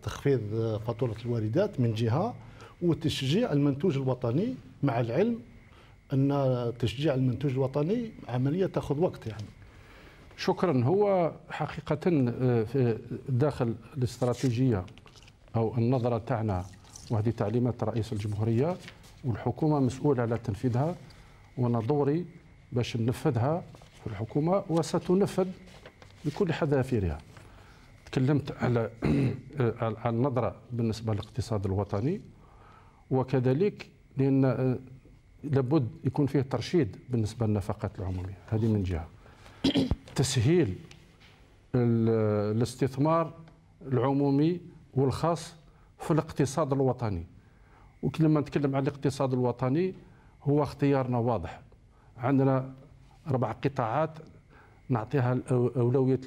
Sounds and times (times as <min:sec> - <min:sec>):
Speech: 0:00.0 - 0:05.5, 0:06.1 - 0:09.6, 0:10.4 - 0:14.9, 0:15.5 - 0:21.0, 0:21.6 - 0:25.6, 0:26.2 - 0:27.3, 0:28.1 - 0:32.3, 0:33.1 - 0:39.1, 0:39.7 - 0:40.9, 0:41.7 - 0:47.3, 0:48.0 - 0:54.3, 0:54.9 - 0:56.2.